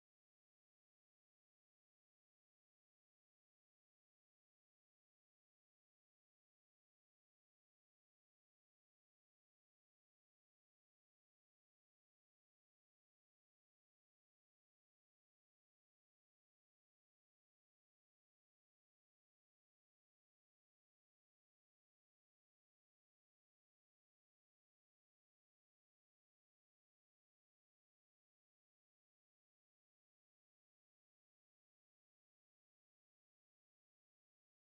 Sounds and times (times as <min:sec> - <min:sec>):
Music: 0:00.0 - 0:34.7.